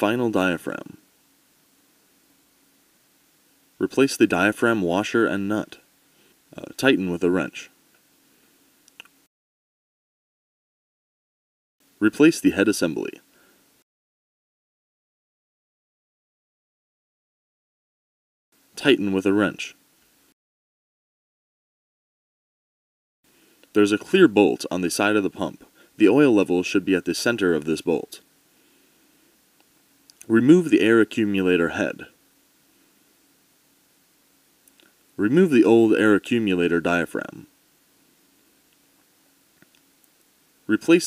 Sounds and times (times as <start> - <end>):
Speech: 0.0 - 1.0, 3.8 - 5.9, 6.5 - 7.8, 12.0 - 13.2, 18.8 - 19.8, 23.8 - 28.2, 30.2 - 32.2, 35.2 - 37.5, 40.7 - 41.0.